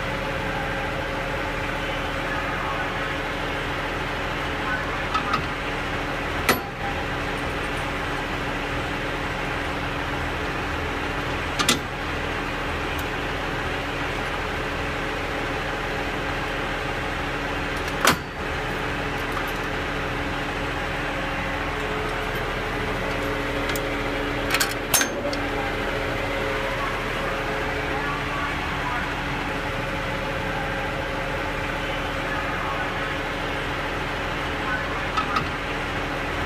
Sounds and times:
Vehicle: 0.0 - 36.4.

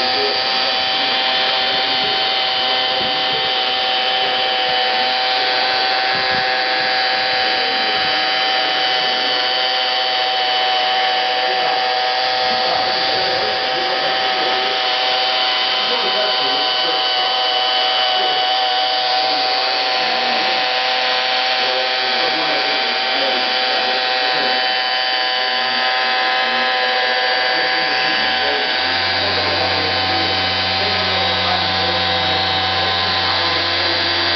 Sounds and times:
Power tool: 0.0 - 34.3.

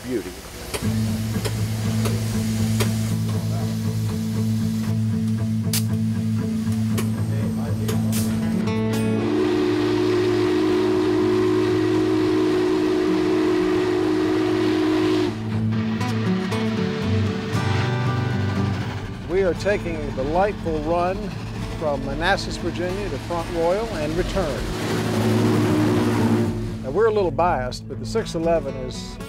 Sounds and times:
Railroad car, train wagon: 0.0 - 27.4
Train horn: 8.9 - 16.0, 24.4 - 27.0.

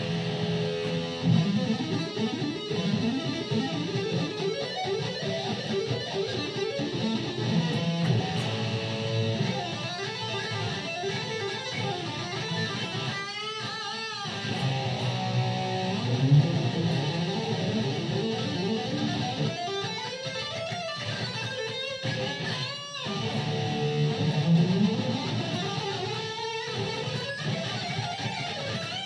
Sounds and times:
Electric guitar: 0.0 - 29.0.

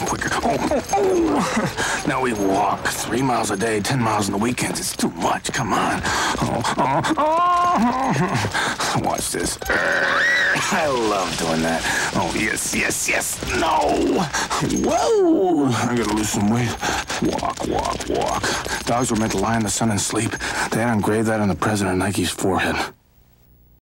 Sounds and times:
Speech: 0.0 - 1.5, 2.1 - 7.0, 9.0 - 9.6, 10.6 - 14.3, 14.9 - 23.0.

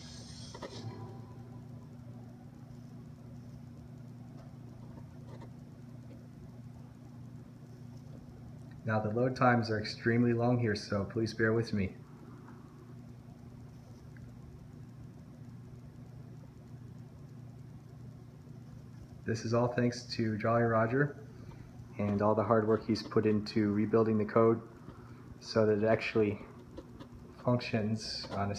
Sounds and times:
Speech: 8.8 - 12.0, 19.2 - 21.2, 22.0 - 24.7, 25.4 - 26.5, 27.4 - 28.5.

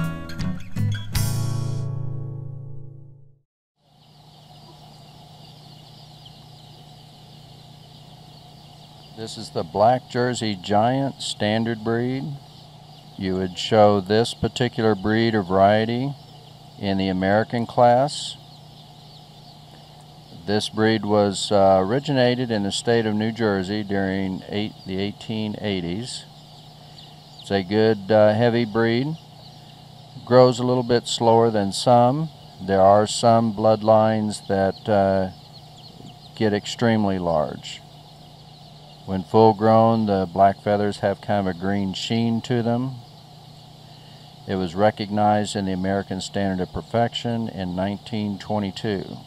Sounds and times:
Speech: 9.2 - 12.4, 13.2 - 16.2, 16.8 - 18.4, 20.3 - 26.3, 27.4 - 29.2, 30.2 - 35.4, 36.4 - 37.8, 39.1 - 43.0, 44.5 - 49.2.

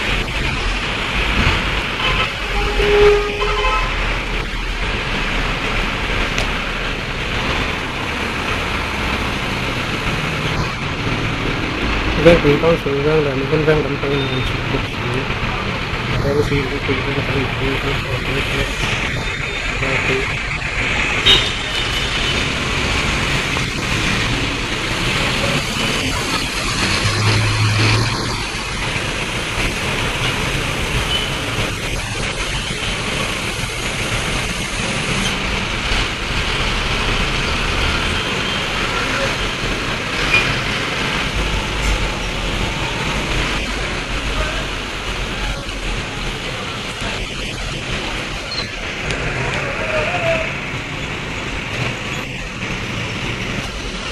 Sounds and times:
Car: 0.0 - 54.1
Traffic noise, roadway noise: 0.0 - 54.1
Speech: 12.2 - 15.5, 16.1 - 18.8, 19.8 - 20.3, 44.2 - 45.8.

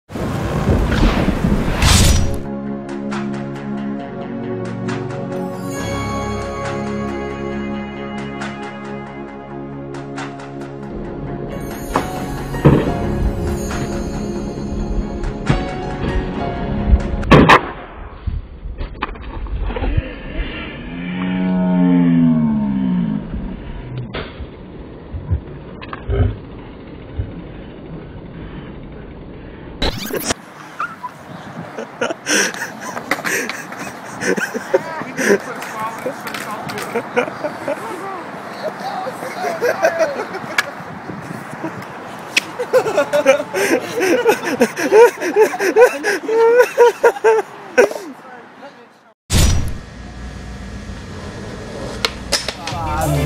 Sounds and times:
Music: 2.5 - 17.3, 52.8 - 53.2.

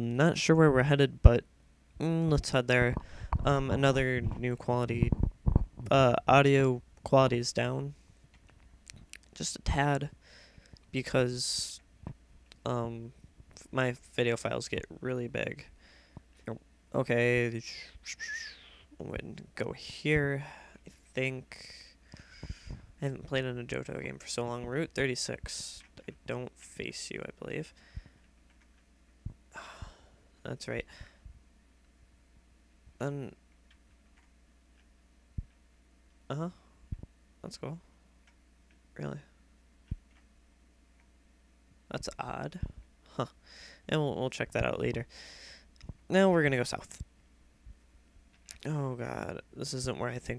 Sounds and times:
Speech: 0.0 - 1.4, 2.0 - 5.2, 5.8 - 8.0, 9.2 - 10.2, 10.9 - 11.8, 12.6 - 15.7, 16.4 - 22.0, 23.0 - 27.8, 30.4 - 30.9, 33.0 - 33.4, 36.3 - 36.6, 37.4 - 37.8, 39.0 - 39.4, 41.9 - 45.1, 46.1 - 47.0, 48.6 - 50.3.

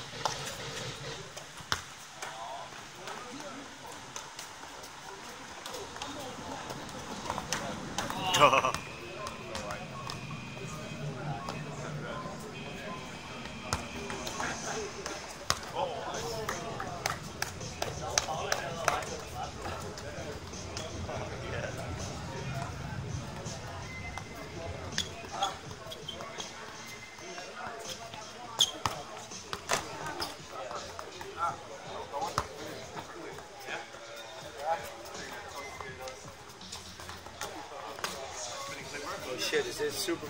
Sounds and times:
Speech: 2.1 - 40.2
Music: 8.4 - 40.2.

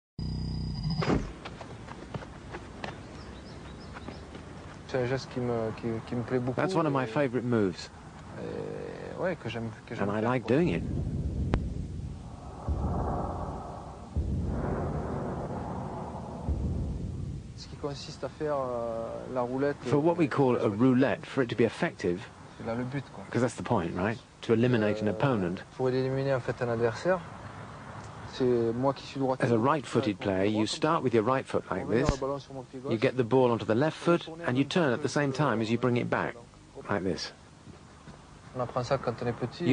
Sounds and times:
Speech: 4.9 - 10.8, 17.6 - 27.2, 28.3 - 37.4, 38.5 - 39.7.

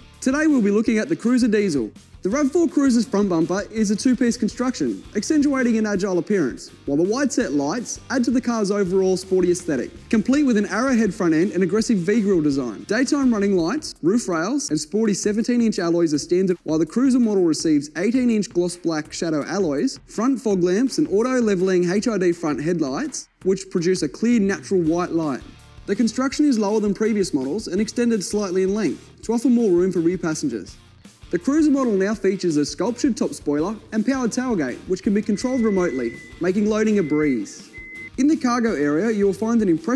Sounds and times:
Music: 0.0 - 39.9
Speech: 0.2 - 39.9.

